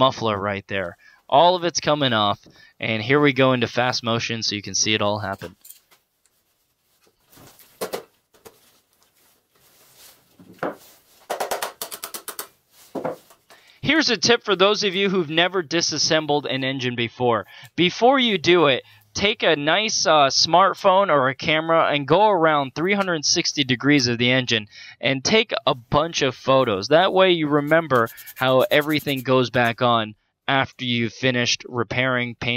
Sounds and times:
Speech: 0:00.0 - 0:05.6, 0:13.8 - 0:32.5.

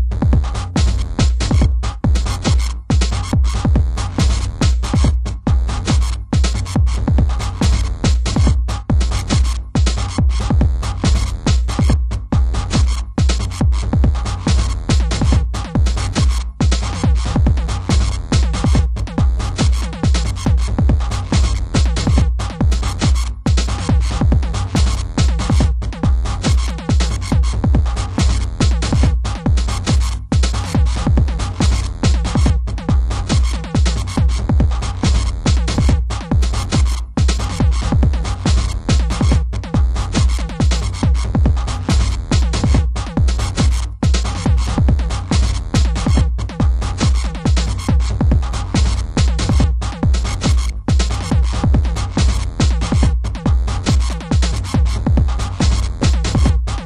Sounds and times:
Sampler: 0:00.0 - 0:56.8
Techno: 0:00.0 - 0:56.8.

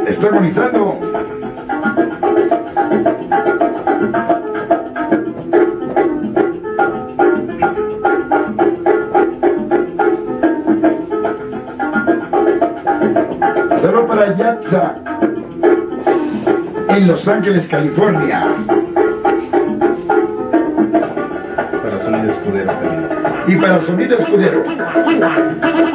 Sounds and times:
Speech: 0:00.0 - 0:01.0, 0:13.8 - 0:15.0, 0:16.9 - 0:18.6, 0:21.8 - 0:24.7
Music: 0:00.0 - 0:25.9.

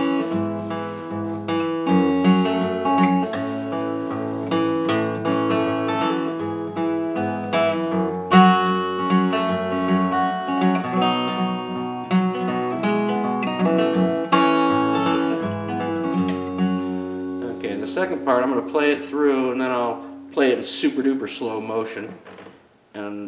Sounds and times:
Strum: 0:00.0 - 0:22.6
Speech: 0:17.4 - 0:22.2, 0:23.0 - 0:23.2.

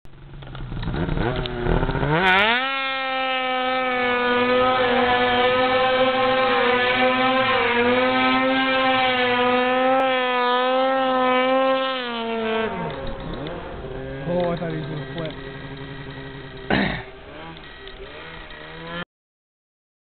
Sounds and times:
Speech: 0:14.2 - 0:15.4.

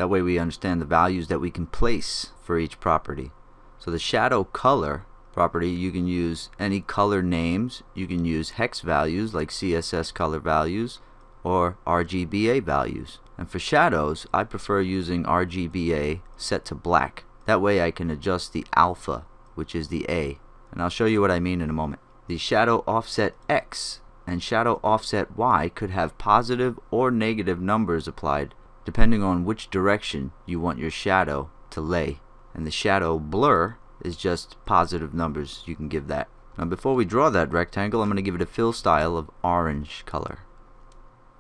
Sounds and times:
Speech: 0:00.0 - 0:40.5.

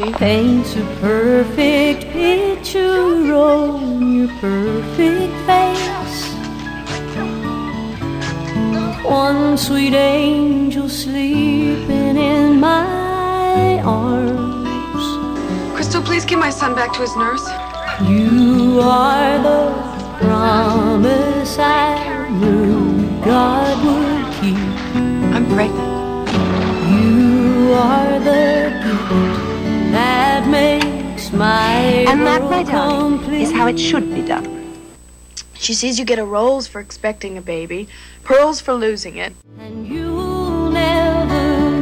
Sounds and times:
Lullaby: 0:00.0 - 0:34.8, 0:39.5 - 0:41.8
Speech: 0:15.8 - 0:17.6, 0:25.3 - 0:25.8, 0:31.5 - 0:34.5, 0:35.4 - 0:39.4.

